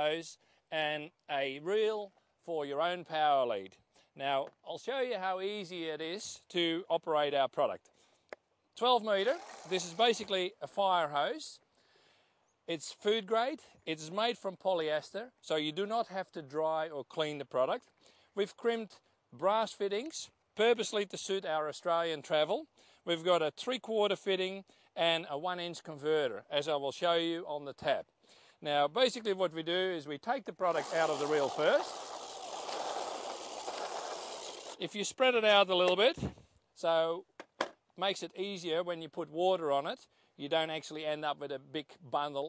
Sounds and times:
Speech: 0.0s - 7.9s, 8.8s - 11.6s, 12.7s - 31.9s, 34.8s - 37.3s, 38.0s - 42.4s.

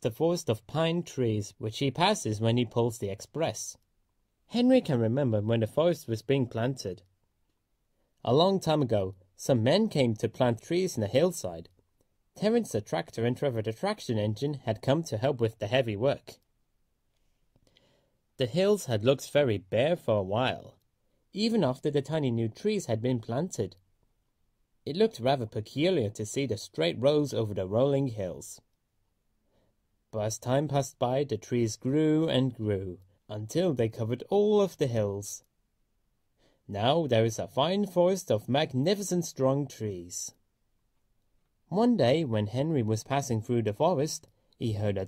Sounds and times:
Speech: 0.0s - 3.8s, 4.5s - 7.1s, 8.2s - 11.8s, 12.4s - 16.4s, 18.4s - 23.8s, 24.9s - 28.7s, 30.1s - 35.5s, 36.7s - 40.4s, 41.7s - 45.0s.

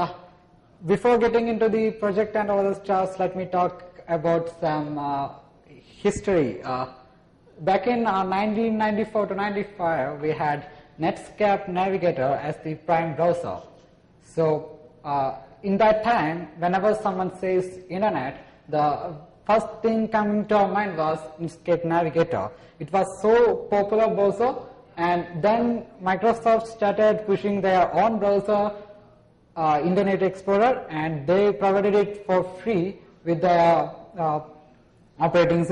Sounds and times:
Speech: 0.0s - 0.2s, 0.8s - 7.0s, 7.6s - 28.8s, 29.6s - 34.6s, 35.2s - 35.7s.

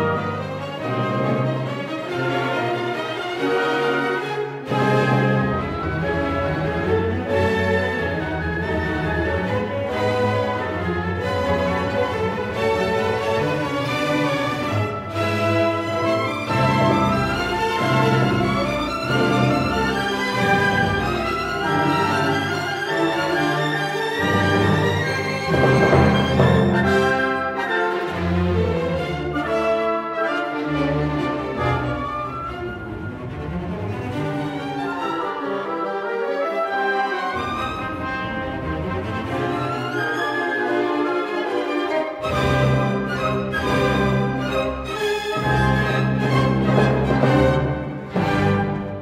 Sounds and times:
Music: 0.0s - 49.0s.

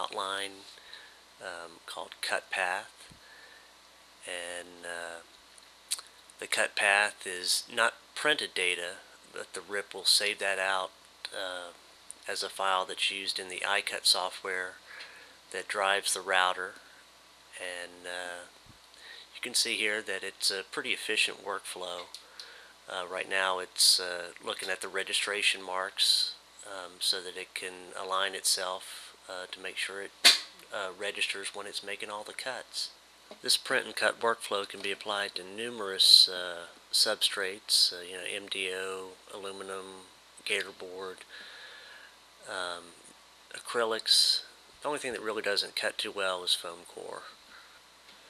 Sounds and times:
Speech: 0.0s - 0.7s, 1.4s - 3.1s, 4.3s - 5.3s, 5.9s - 14.8s, 15.6s - 16.9s, 17.6s - 18.5s, 19.3s - 22.1s, 22.9s - 30.1s, 30.7s - 41.3s, 42.5s - 47.4s.

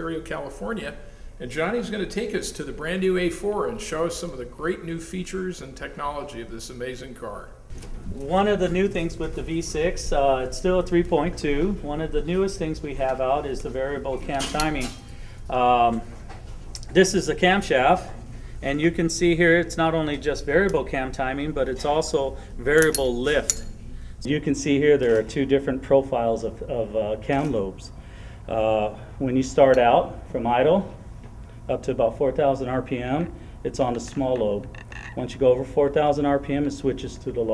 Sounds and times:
Speech: 0.0s - 16.1s, 16.8s - 23.6s, 24.3s - 31.0s, 31.7s - 37.5s.

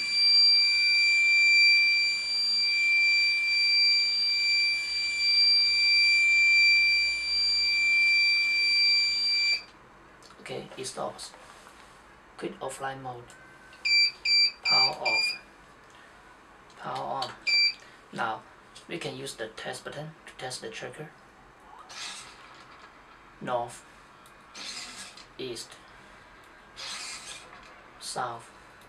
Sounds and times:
Smoke detector, smoke alarm: 0.0s - 9.7s, 13.4s - 15.4s, 17.5s - 17.8s
Speech: 10.4s - 11.4s, 12.4s - 13.3s, 14.7s - 15.4s, 16.8s - 17.4s, 18.2s - 21.2s, 23.4s - 23.8s, 25.4s - 25.8s, 28.0s - 28.5s.

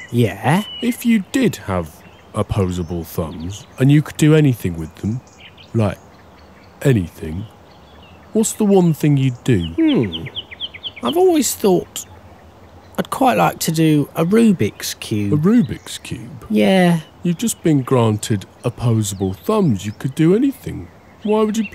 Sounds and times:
Speech: 0.1s - 5.2s, 5.8s - 6.0s, 6.8s - 7.5s, 8.4s - 10.4s, 11.0s - 12.1s, 13.0s - 21.7s.

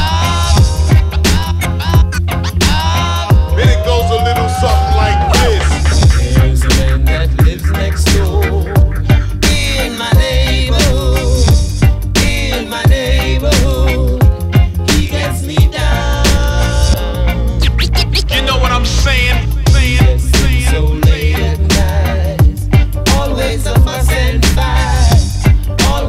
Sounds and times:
Music: 0.0s - 26.0s.

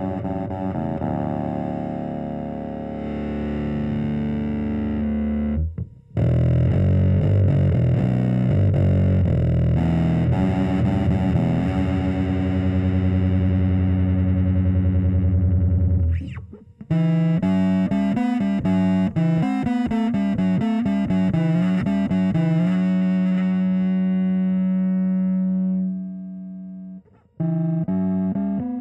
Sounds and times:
Bass guitar: 0.0s - 28.8s
Effects unit: 0.0s - 28.8s.

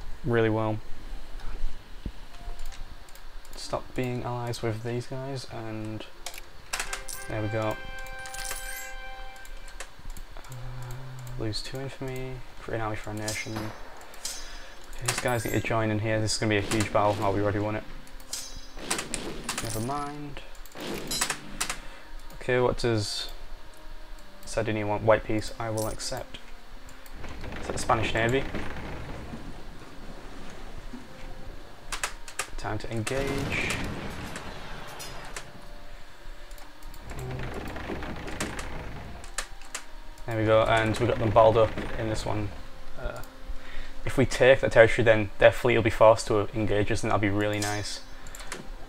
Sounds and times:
Speech: 0.3s - 0.8s, 3.6s - 6.1s, 7.3s - 7.8s, 10.8s - 13.8s, 15.0s - 17.8s, 19.6s - 20.5s, 22.4s - 23.4s, 24.5s - 26.4s, 27.7s - 28.4s, 32.6s - 33.8s, 40.3s - 43.2s, 44.1s - 48.0s
Music: 1.4s - 48.8s.

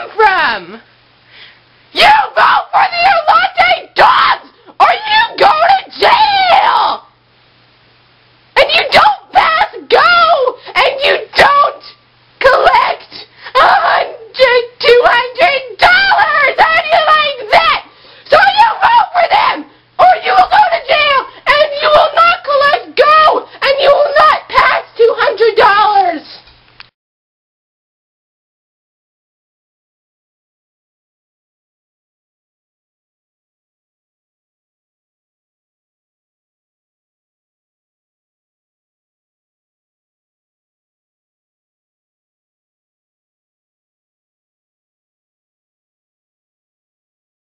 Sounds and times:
Speech: 0.0s - 0.8s, 2.0s - 7.1s, 8.6s - 26.4s.

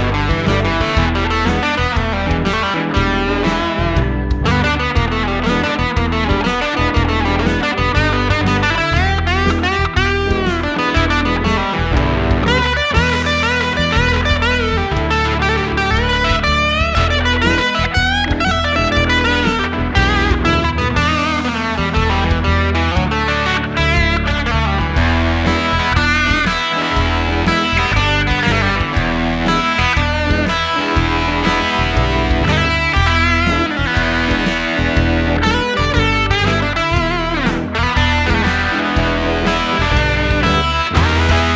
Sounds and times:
Electric guitar: 0.0s - 41.5s
Strum: 0.0s - 41.5s.

